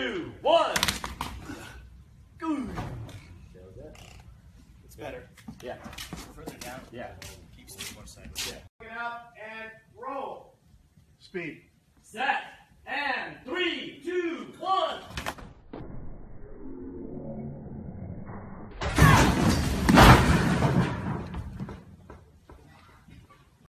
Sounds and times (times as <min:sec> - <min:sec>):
Speech: 0:04.9 - 0:10.6, 0:11.2 - 0:15.1.